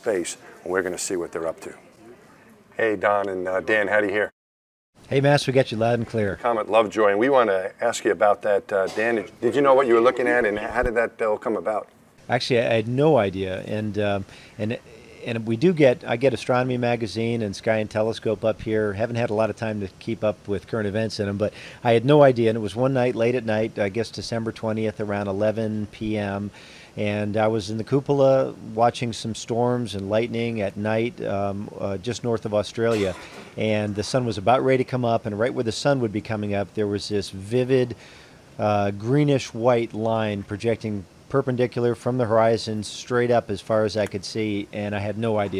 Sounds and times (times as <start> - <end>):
Speech: 0.0 - 2.2, 2.8 - 4.4, 5.1 - 38.0, 38.6 - 45.5.